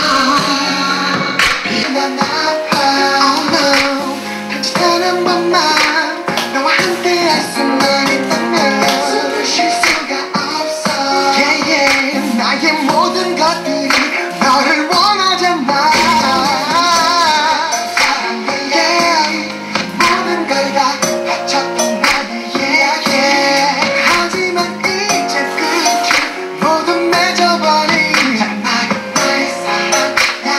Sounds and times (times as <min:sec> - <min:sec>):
Music: 0:00.0 - 0:30.5.